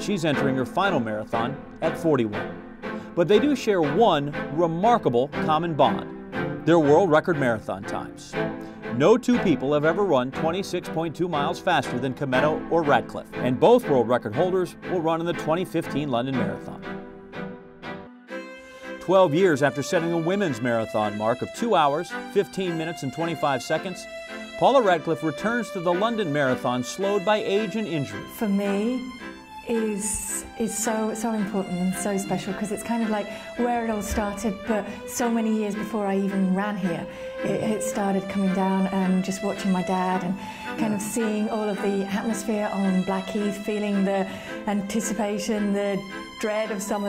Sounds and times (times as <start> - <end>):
Speech: 0.0 - 2.4, 3.2 - 6.0, 6.7 - 8.4, 9.0 - 16.8, 19.0 - 24.0, 24.6 - 29.0, 29.7 - 47.0
Music: 0.0 - 47.0.